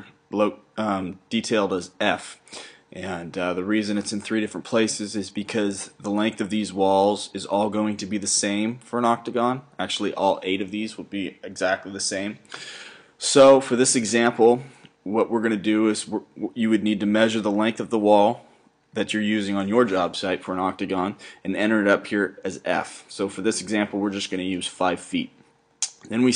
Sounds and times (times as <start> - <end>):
Speech: 0.0 - 12.5, 13.2 - 26.3.